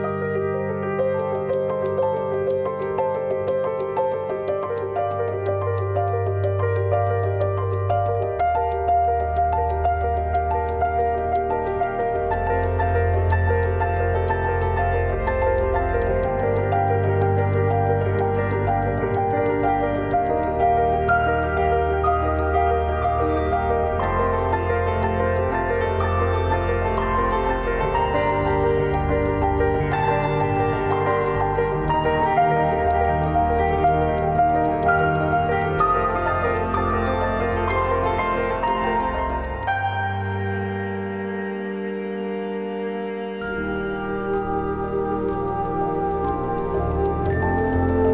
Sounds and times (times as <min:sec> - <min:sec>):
Music: 0:00.0 - 0:48.1.